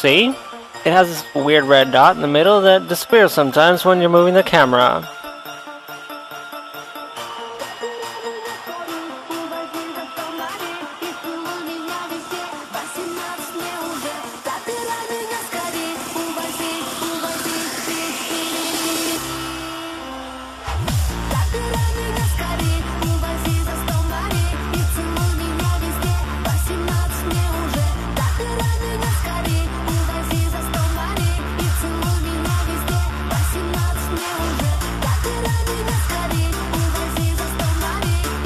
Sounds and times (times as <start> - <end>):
Music: 0.0 - 38.4.